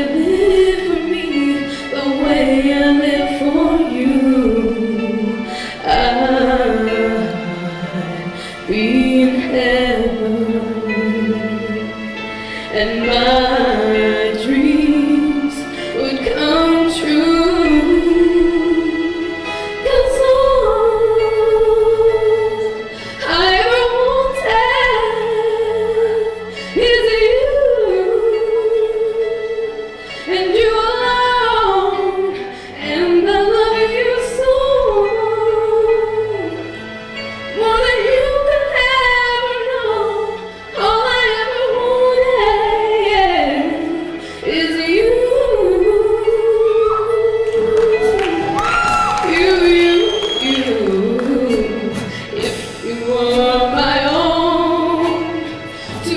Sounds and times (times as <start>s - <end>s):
Female singing: 0.0s - 11.6s, 12.7s - 29.7s, 30.3s - 36.5s, 37.6s - 55.4s, 56.0s - 56.1s
Music: 0.0s - 56.1s.